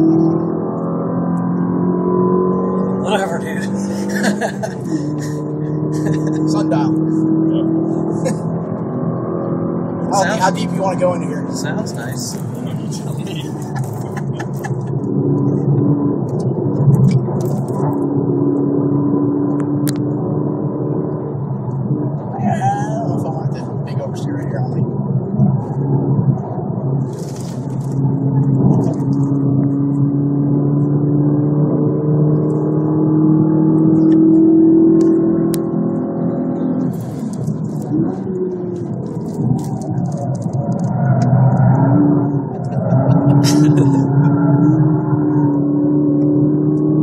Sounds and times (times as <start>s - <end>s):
Speech: 3.0s - 3.8s, 6.1s - 7.0s, 10.1s - 13.8s, 22.3s - 24.8s.